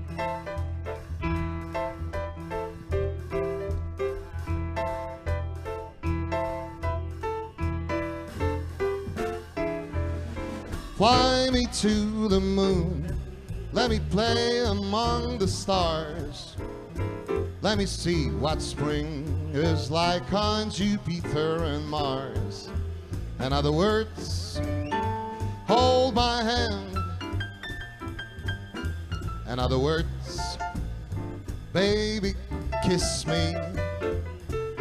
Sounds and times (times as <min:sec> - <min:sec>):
Music: 0:00.0 - 0:34.8.